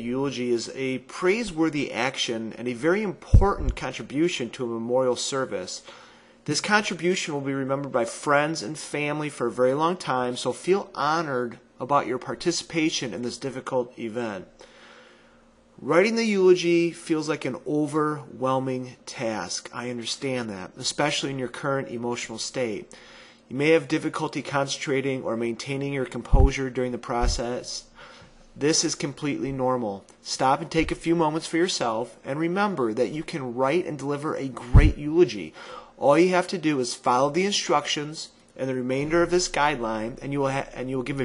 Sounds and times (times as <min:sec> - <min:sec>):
Male speech, man speaking: 0:00.0 - 0:05.8, 0:06.5 - 0:14.5, 0:15.8 - 0:22.9, 0:23.5 - 0:27.9, 0:28.6 - 0:41.2
Narration, monologue: 0:00.0 - 0:41.2.